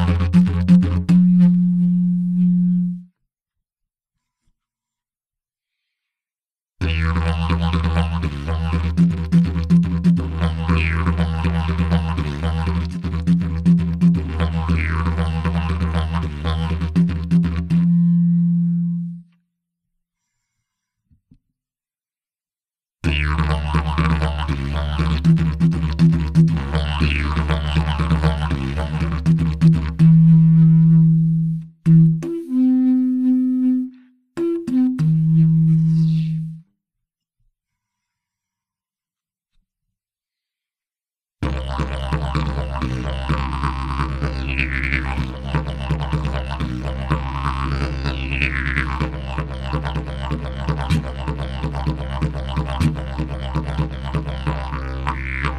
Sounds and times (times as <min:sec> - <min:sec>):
Didgeridoo: 0:00.0 - 0:03.1, 0:06.8 - 0:19.3, 0:23.0 - 0:36.6, 0:41.4 - 0:55.5.